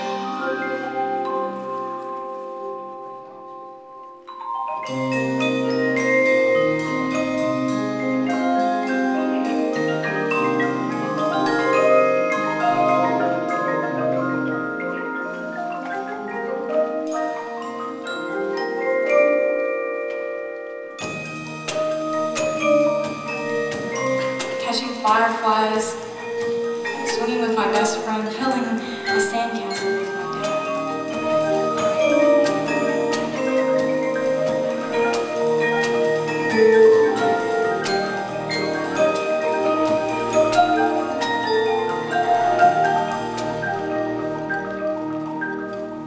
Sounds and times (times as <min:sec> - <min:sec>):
Percussion: 0:00.0 - 0:46.0.